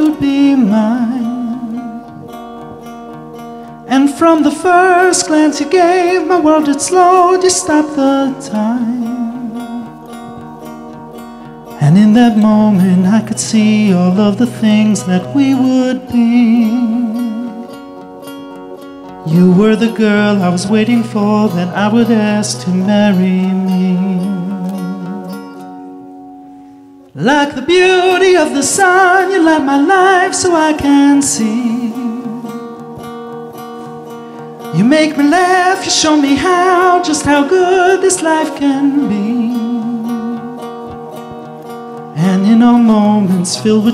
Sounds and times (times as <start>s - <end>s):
Plucked string instrument: 0.0s - 43.9s.